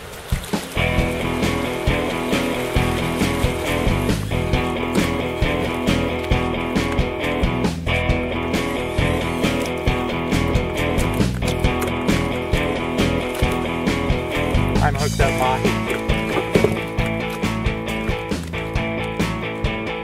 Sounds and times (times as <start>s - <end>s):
Music: 0.3s - 20.0s
Speech: 14.8s - 15.9s.